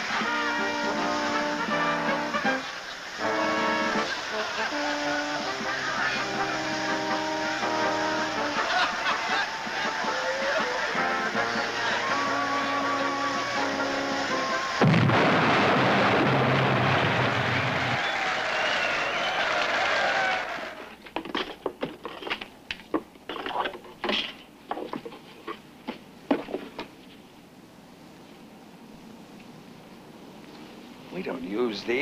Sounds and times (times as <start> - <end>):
Music: 0.0 - 14.8.